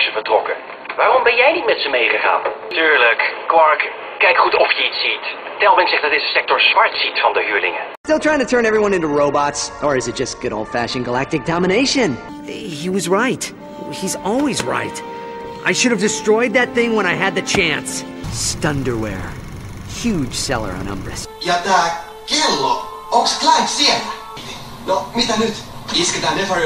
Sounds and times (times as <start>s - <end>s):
Ratchet, pawl: 18.3s - 21.3s.